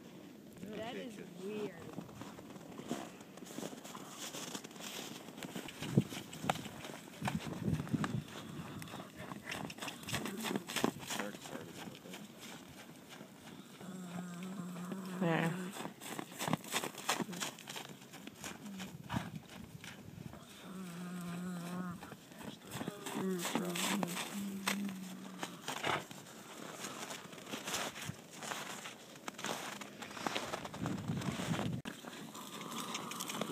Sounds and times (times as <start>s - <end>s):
Speech: 0.6s - 1.9s, 10.1s - 12.3s, 15.2s - 15.6s, 22.4s - 25.2s.